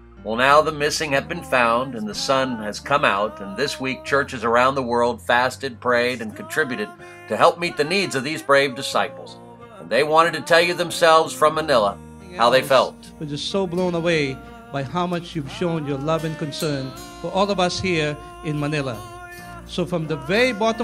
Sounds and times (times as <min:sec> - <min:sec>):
Music: 0:00.0 - 0:20.8
Narration, monologue: 0:00.0 - 0:20.8
Male speech, man speaking: 0:00.3 - 0:20.8.